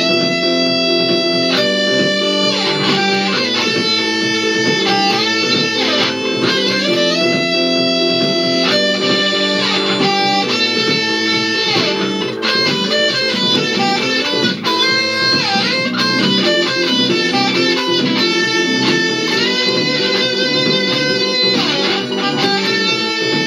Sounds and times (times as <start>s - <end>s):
Guitar: 0.0s - 23.4s.